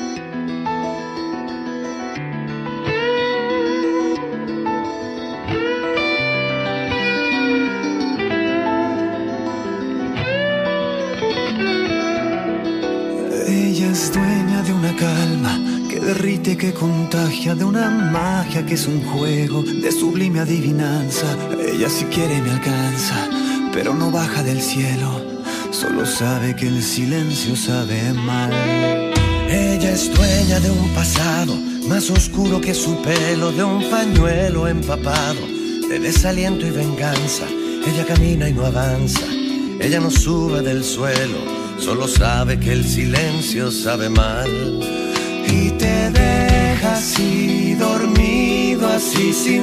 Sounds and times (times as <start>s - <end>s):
Music: 0.0s - 49.6s.